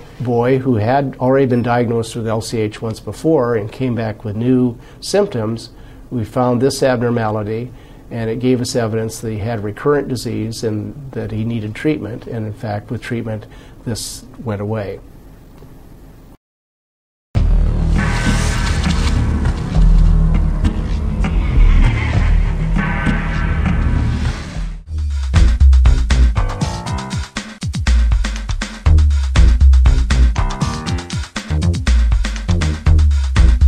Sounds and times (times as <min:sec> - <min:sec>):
Music: 0:17.4 - 0:33.6.